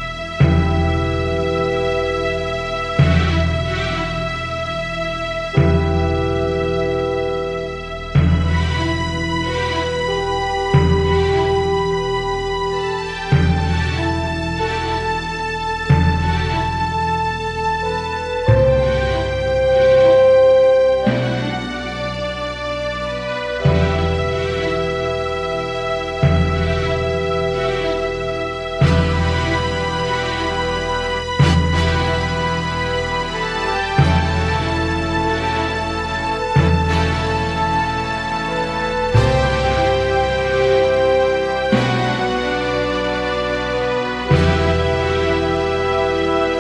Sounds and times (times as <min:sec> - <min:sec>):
Theme music: 0:00.0 - 0:46.6.